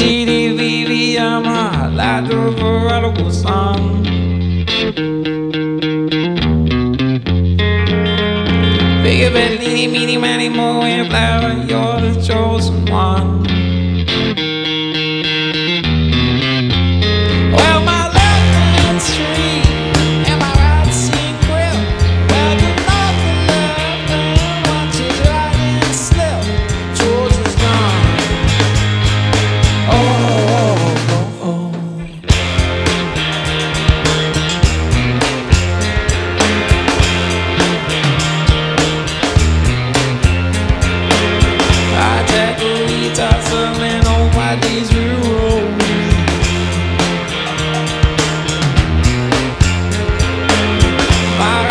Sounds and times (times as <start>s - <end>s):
Music: 0.0s - 51.7s.